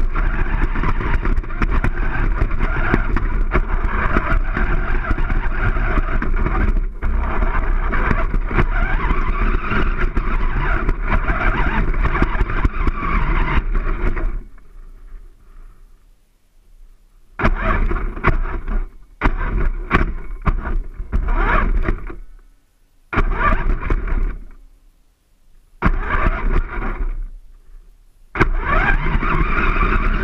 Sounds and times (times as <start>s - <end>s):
Vehicle: 0.0s - 15.3s, 17.4s - 22.4s, 23.1s - 24.6s, 25.8s - 27.3s, 28.4s - 30.2s.